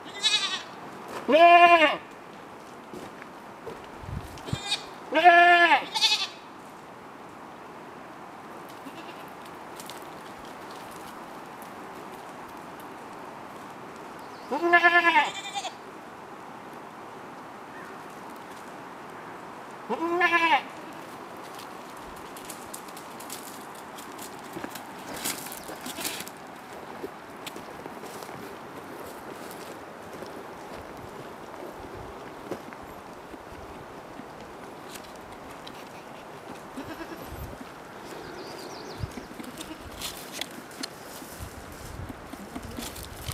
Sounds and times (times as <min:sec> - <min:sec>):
Bleat: 0:00.0 - 0:02.0, 0:04.4 - 0:06.5, 0:08.8 - 0:09.3, 0:14.5 - 0:15.8, 0:19.9 - 0:21.1, 0:36.8 - 0:37.5, 0:39.4 - 0:40.0.